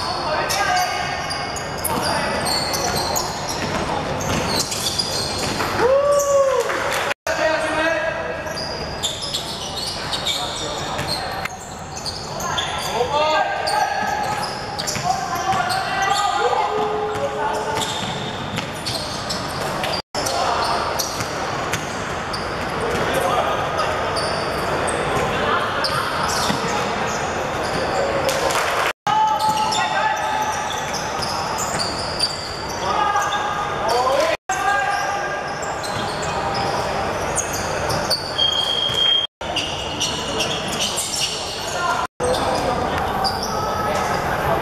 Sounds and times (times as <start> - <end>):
Speech: 0.0 - 4.2, 7.3 - 8.9, 12.4 - 18.0, 22.8 - 24.2, 24.8 - 31.6, 32.8 - 35.6, 40.1 - 44.6.